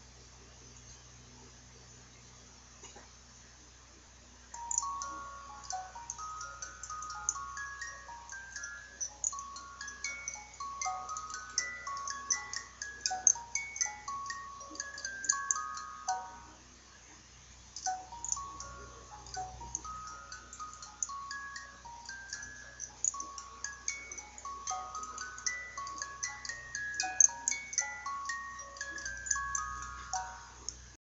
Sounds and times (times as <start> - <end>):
Music: 4.5 - 31.0.